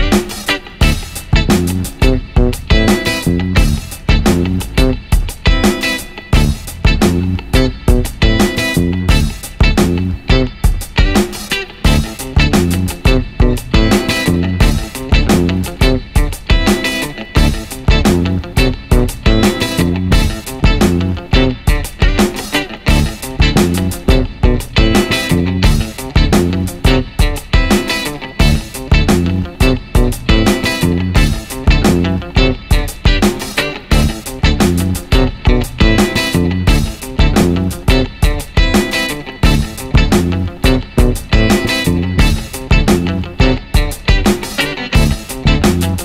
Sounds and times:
Music: 0:00.0 - 0:46.0.

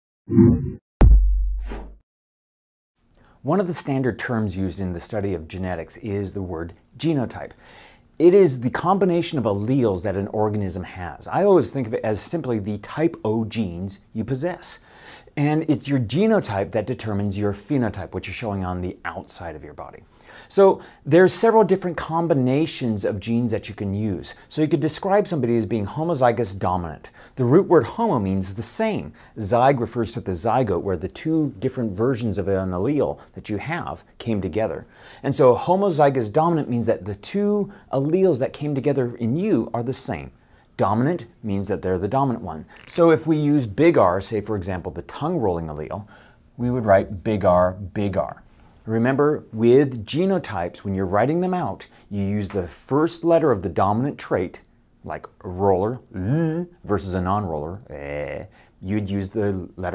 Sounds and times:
Inside, small room: 0:03.0 - 0:59.9
Speech: 0:03.4 - 0:07.6, 0:08.2 - 0:14.8, 0:15.4 - 0:59.9.

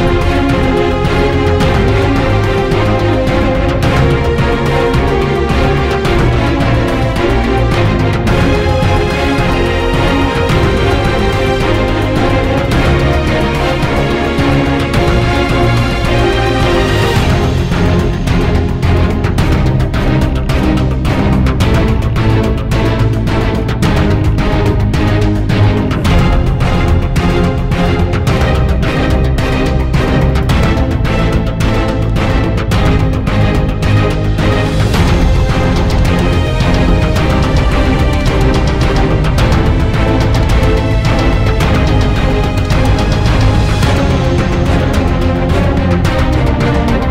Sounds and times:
Music: 0:00.0 - 0:47.1.

